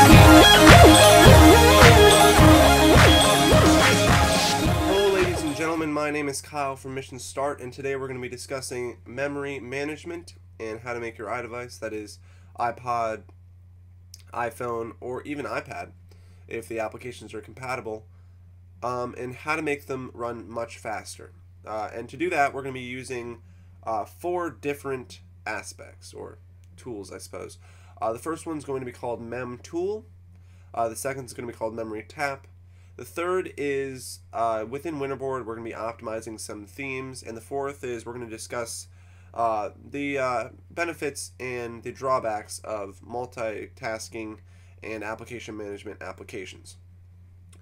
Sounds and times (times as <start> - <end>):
Speech: 4.9 - 13.3, 14.2 - 15.9, 16.5 - 18.1, 18.8 - 30.1, 30.8 - 46.8.